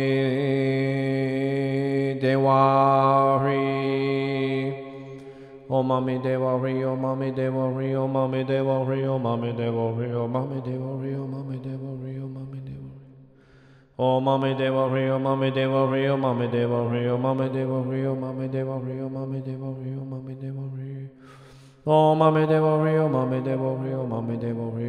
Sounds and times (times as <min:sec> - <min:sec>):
Mantra: 0:00.0 - 0:05.0, 0:05.7 - 0:13.0, 0:14.0 - 0:21.1, 0:21.9 - 0:24.8.